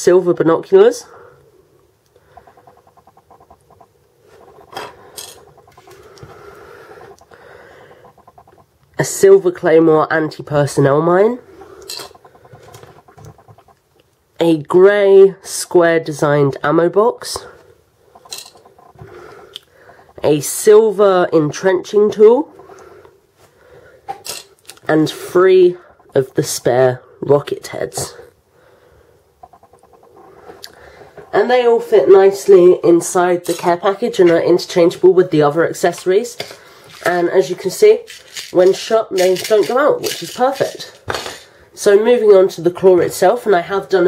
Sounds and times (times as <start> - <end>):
Speech: 0.0 - 1.1, 9.0 - 11.4, 14.4 - 17.6, 20.2 - 22.5, 24.9 - 28.3, 31.3 - 41.0, 41.8 - 44.0.